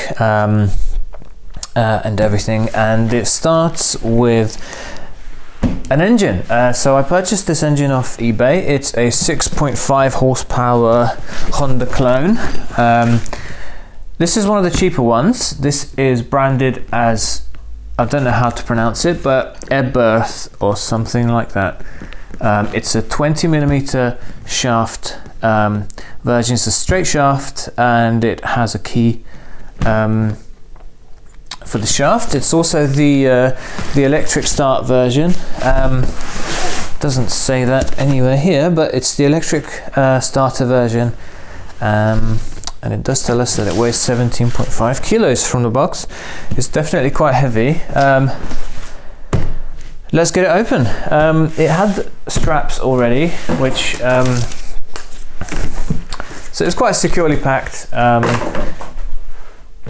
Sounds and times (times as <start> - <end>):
Speech: 0.0 - 1.0, 1.6 - 4.6, 5.9 - 13.3, 14.2 - 21.8, 22.4 - 29.2, 29.8 - 30.5, 31.5 - 36.2, 37.0 - 41.2, 41.8 - 48.4, 50.1 - 54.6, 56.5 - 58.8.